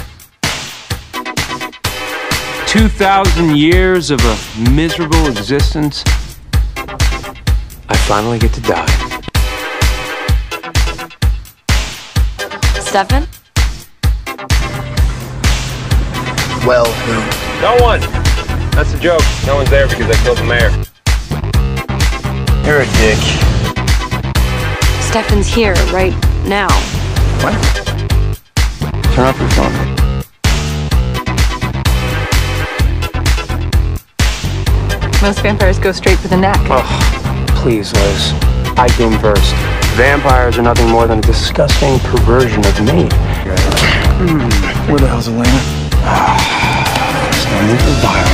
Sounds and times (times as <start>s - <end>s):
Speech: 2.7s - 6.1s, 29.1s - 29.9s, 37.5s - 45.7s.